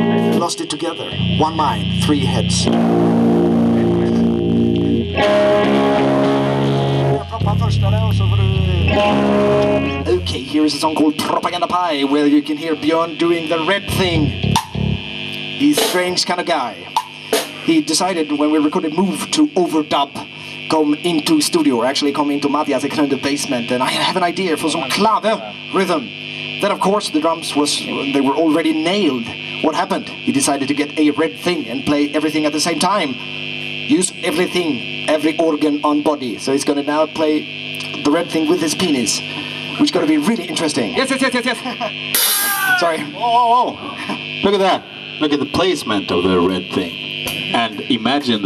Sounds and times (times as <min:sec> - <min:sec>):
Music: 0:00.0 - 0:10.6, 0:13.7 - 0:16.2, 0:16.9 - 0:17.7
Speech: 0:00.3 - 0:02.8, 0:03.7 - 0:04.3, 0:07.2 - 0:08.8, 0:10.0 - 0:14.4, 0:15.6 - 0:16.9, 0:17.5 - 0:33.2, 0:33.9 - 0:41.9, 0:42.7 - 0:48.4.